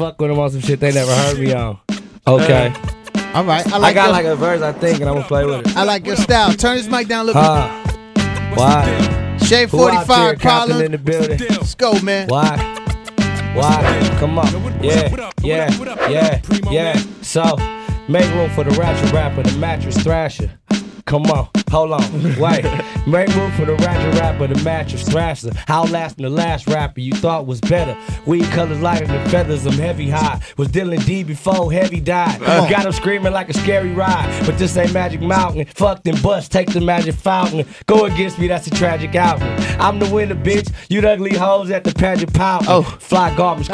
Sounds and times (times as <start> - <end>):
Hip hop music: 0.0 - 43.7.